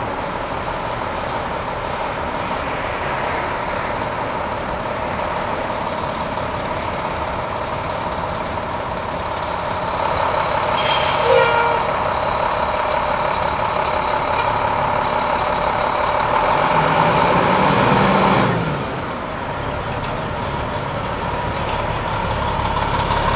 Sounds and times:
Truck: 0.0 - 23.3.

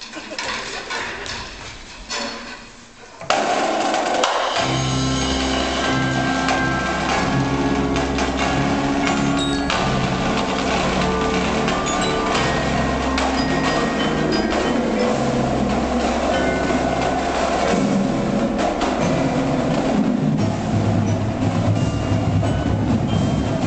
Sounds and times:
Wood block: 0.0 - 23.6.

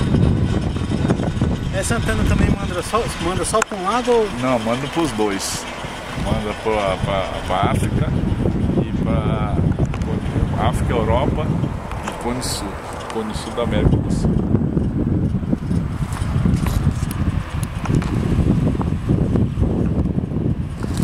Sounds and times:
Speech: 1.7 - 8.2, 8.8 - 11.5, 12.1 - 14.3.

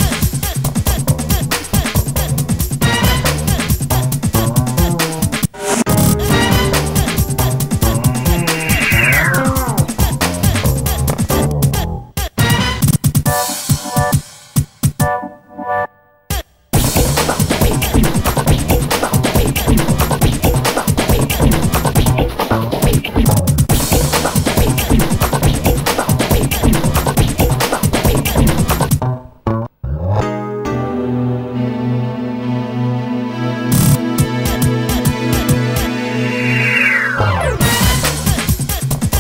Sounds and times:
Music: 0.0 - 39.2.

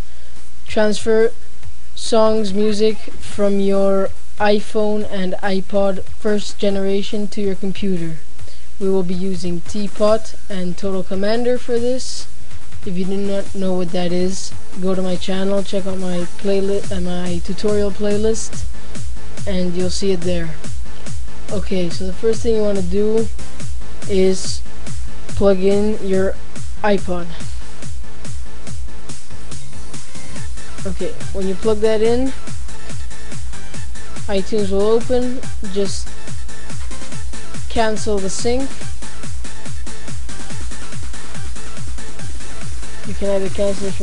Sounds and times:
Music: 0.0 - 44.0
Speech: 0.7 - 1.4, 2.0 - 8.2, 8.8 - 18.6, 19.5 - 20.6, 21.5 - 23.3, 24.1 - 24.6, 25.4 - 27.5, 30.8 - 32.4, 34.3 - 36.1, 37.7 - 38.8, 43.1 - 44.0.

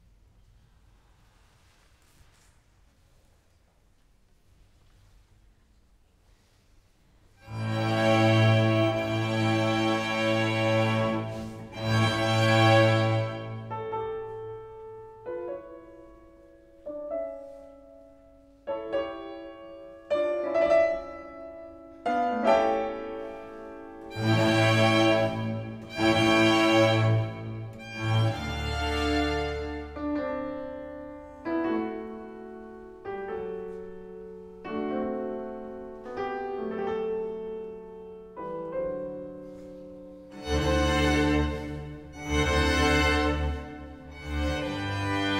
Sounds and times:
Piano: 0.0 - 45.3.

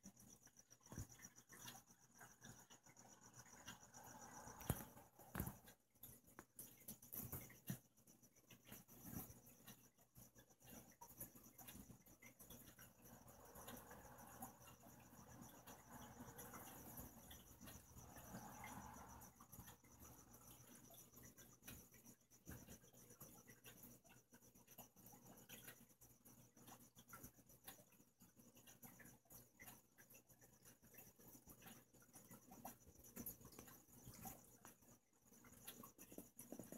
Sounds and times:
Cricket: 0.0 - 36.7.

